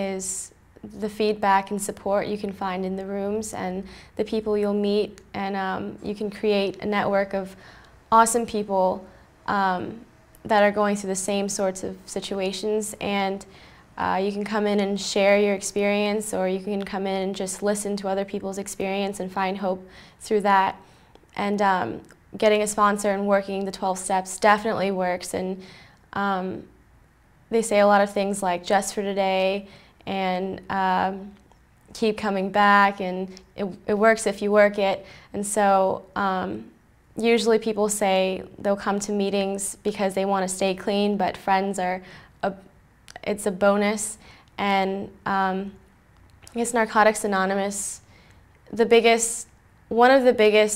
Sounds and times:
Speech: 0:00.0 - 0:20.8, 0:21.4 - 0:25.6, 0:26.2 - 0:26.7, 0:27.5 - 0:45.8, 0:46.5 - 0:48.0, 0:48.7 - 0:50.7.

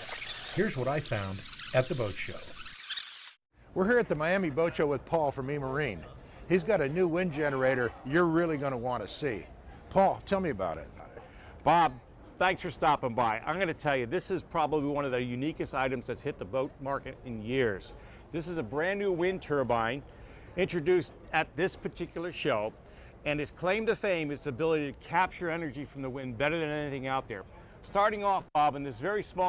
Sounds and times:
Speech: 0:00.6 - 0:02.4, 0:03.8 - 0:20.0, 0:20.6 - 0:29.4.

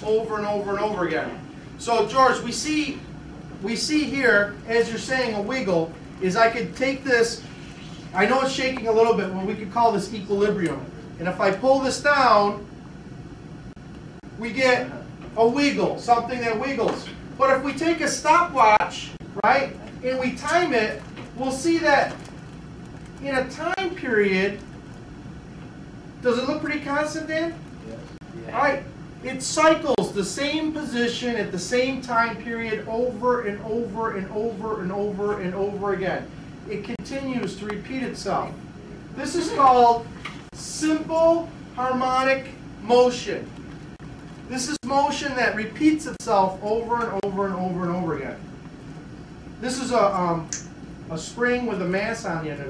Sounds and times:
Speech: 0:00.0 - 0:12.7, 0:14.4 - 0:22.2, 0:23.2 - 0:24.6, 0:26.2 - 0:43.5, 0:44.5 - 0:48.4, 0:49.6 - 0:52.6.

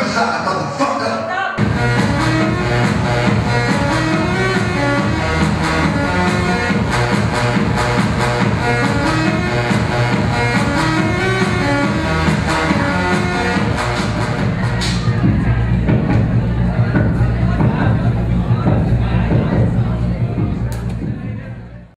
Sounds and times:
Speech: 0:00.0 - 0:01.6, 0:14.6 - 0:21.9
Music: 0:01.6 - 0:21.9.

